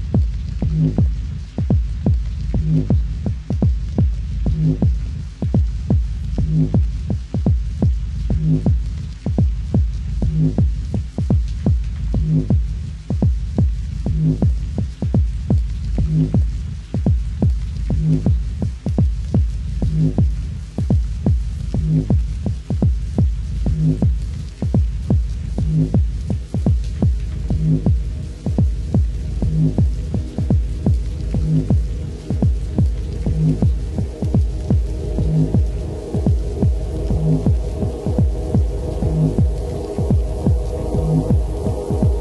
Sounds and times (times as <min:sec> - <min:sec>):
Rain on surface: 0:00.0 - 0:42.2.